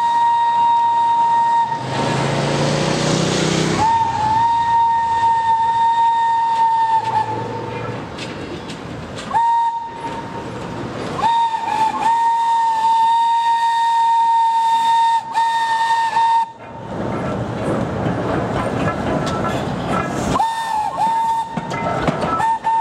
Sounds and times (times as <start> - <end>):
Steam whistle: 0.0 - 2.2, 3.8 - 7.8, 9.3 - 10.2, 11.2 - 16.6, 20.4 - 21.6, 22.4 - 22.8.